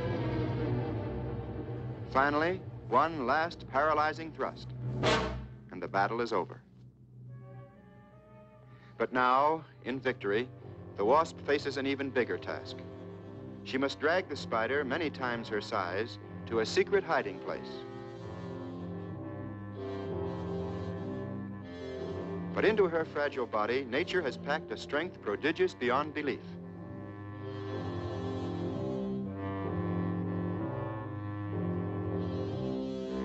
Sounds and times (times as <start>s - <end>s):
Music: 0.0s - 33.2s
Speech: 2.2s - 4.7s, 5.7s - 6.6s, 9.0s - 12.8s, 13.7s - 17.8s, 22.6s - 26.6s.